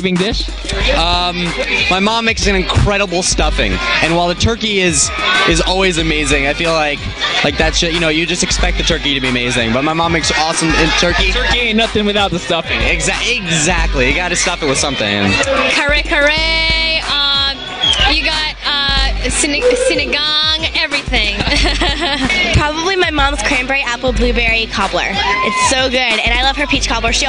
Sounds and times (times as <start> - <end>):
Speech: 0.0 - 22.0, 22.6 - 27.2
Music: 0.0 - 27.2.